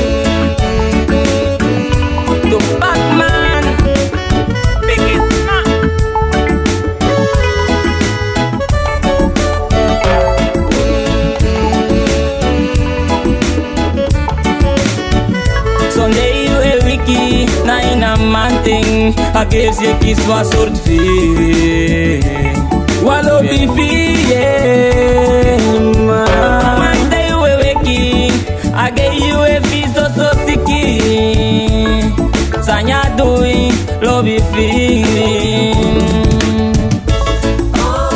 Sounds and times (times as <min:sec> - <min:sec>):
Blues: 0:00.0 - 0:38.1
Soundtrack music: 0:00.0 - 0:38.1.